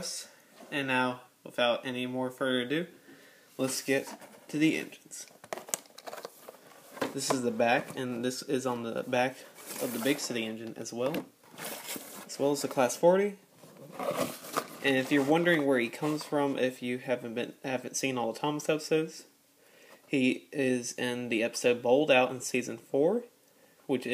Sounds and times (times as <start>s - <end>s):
Speech: 0.0s - 2.9s, 3.6s - 5.4s, 7.1s - 11.3s, 12.3s - 13.4s, 14.8s - 19.3s, 20.1s - 23.3s, 23.9s - 24.1s.